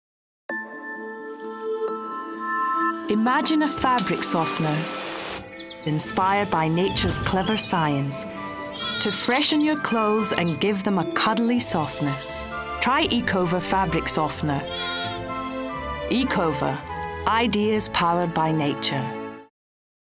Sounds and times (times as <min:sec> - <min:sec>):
Music: 0:00.5 - 0:19.5
Speech: 0:03.1 - 0:04.9, 0:05.9 - 0:08.2, 0:09.0 - 0:14.7, 0:16.1 - 0:19.2.